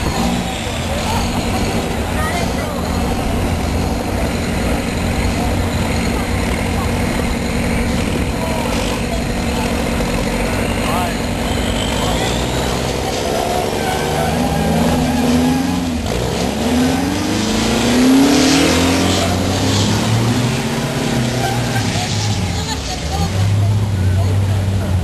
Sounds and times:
Speech: 0.0s - 15.0s, 20.7s - 25.0s
Vehicle: 0.0s - 25.0s.

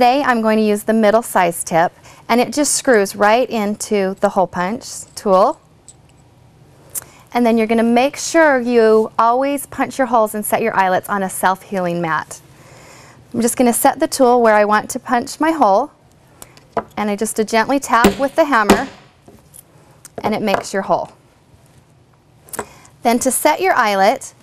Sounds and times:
Speech: 7.4s - 12.4s, 13.4s - 16.0s, 20.2s - 21.2s, 23.1s - 24.4s.

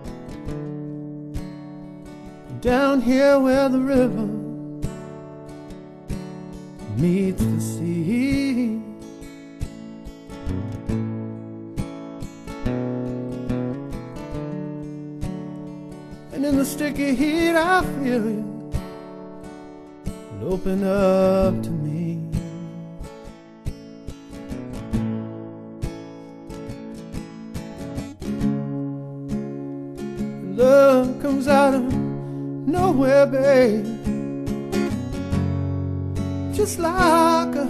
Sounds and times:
Music: 0.0s - 37.6s.

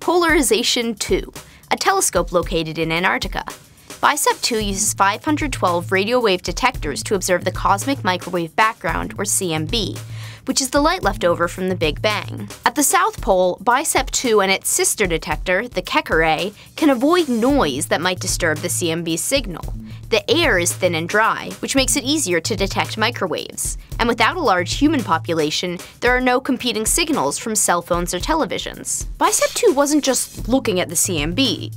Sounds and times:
Music: 0.0s - 31.7s
Speech: 0.0s - 31.7s.

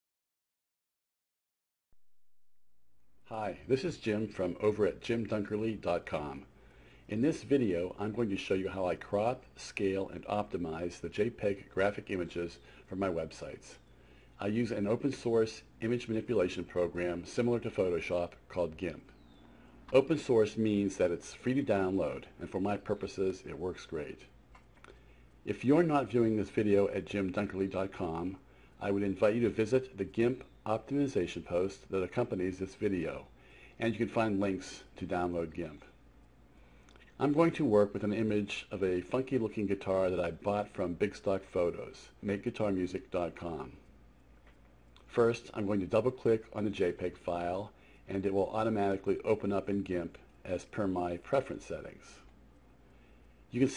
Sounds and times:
Speech: 3.3s - 6.5s, 7.1s - 13.8s, 14.4s - 19.2s, 19.9s - 24.3s, 25.4s - 36.0s, 37.0s - 43.9s, 45.0s - 52.3s, 53.5s - 53.7s.

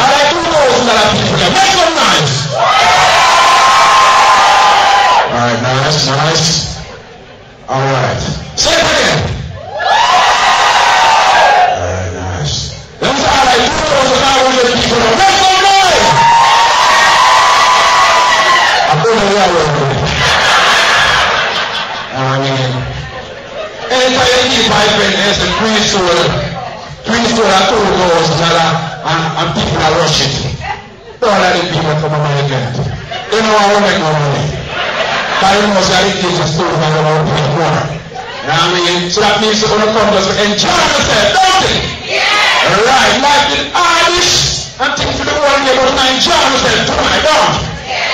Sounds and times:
Speech: 0.0s - 2.5s, 5.3s - 6.9s, 7.7s - 9.4s, 11.7s - 16.1s, 18.9s - 20.1s, 22.1s - 23.1s, 23.9s - 34.6s, 35.4s - 41.9s, 42.6s - 47.8s.

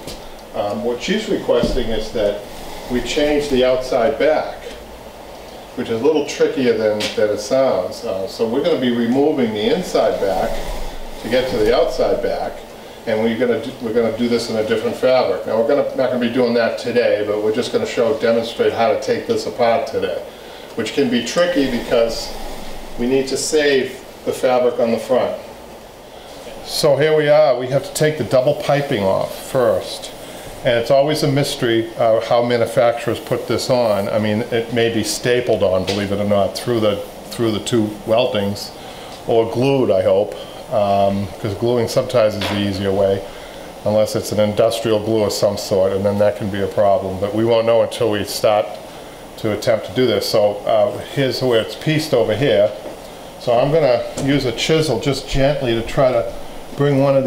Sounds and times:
Speech: 0.5s - 4.8s, 5.8s - 22.4s, 23.0s - 25.6s, 26.6s - 48.8s, 49.4s - 57.2s.

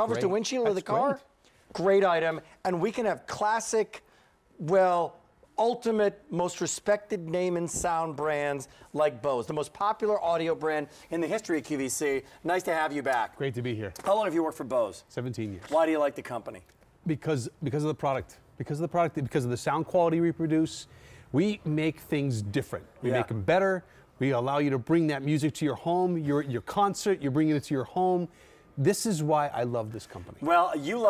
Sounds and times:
Speech: 0.0s - 4.0s, 21.4s - 31.0s.

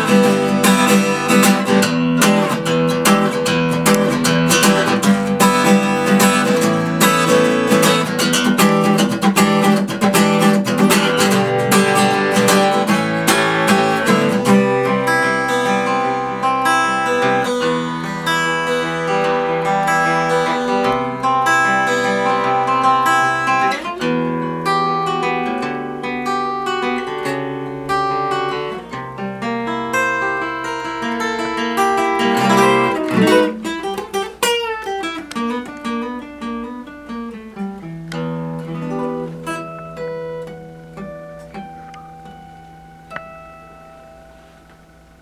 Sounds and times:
Acoustic guitar: 0.0s - 45.2s.

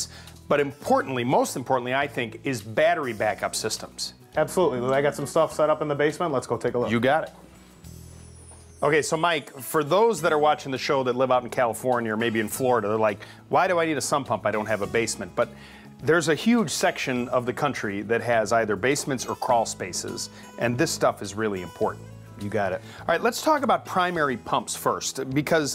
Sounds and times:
Speech: 0.0s - 7.4s, 8.8s - 25.7s
Music: 0.0s - 25.7s.

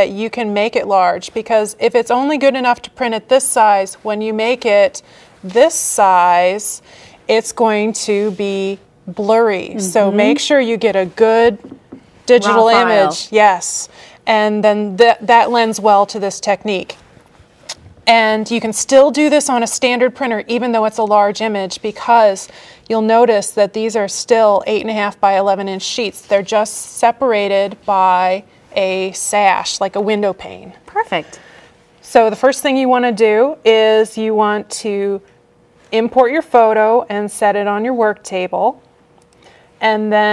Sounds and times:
Speech: 7.3s - 11.6s, 12.3s - 17.0s.

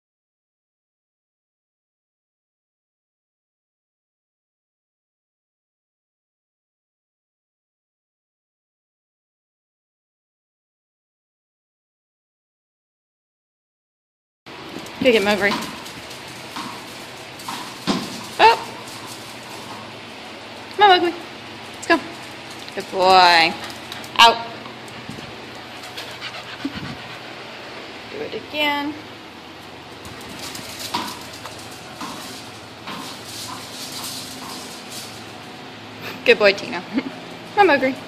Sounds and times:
Speech: 15.0s - 15.7s, 18.4s - 18.7s, 20.8s - 21.2s, 22.8s - 23.6s, 24.2s - 24.6s, 36.2s - 36.9s, 37.6s - 38.0s.

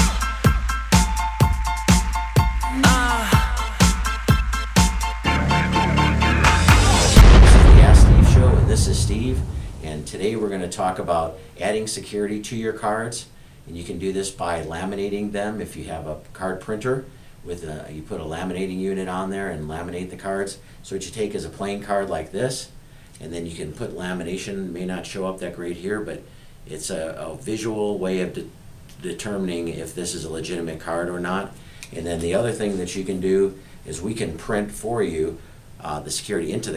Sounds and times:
Speech: 7.4s - 36.7s.

